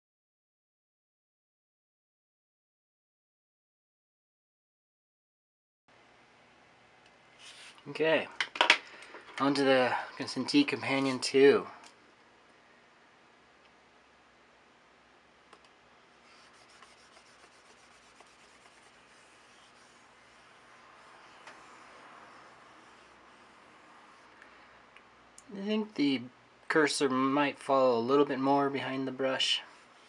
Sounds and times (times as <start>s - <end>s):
Inside, small room: 5.9s - 30.0s
Speech: 7.8s - 8.4s, 9.4s - 11.8s, 25.4s - 29.7s.